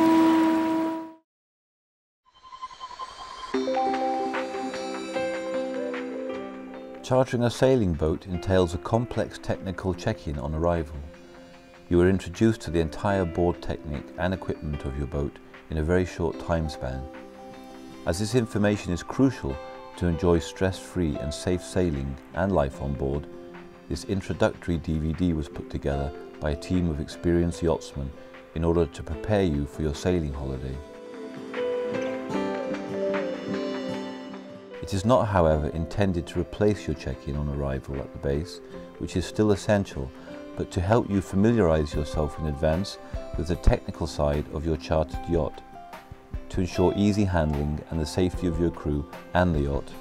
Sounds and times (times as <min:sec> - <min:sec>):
Music: 0:02.3 - 0:50.0
Speech: 0:07.0 - 0:11.1, 0:11.9 - 0:17.1, 0:18.1 - 0:23.3, 0:23.9 - 0:30.8, 0:34.8 - 0:45.6, 0:46.5 - 0:50.0.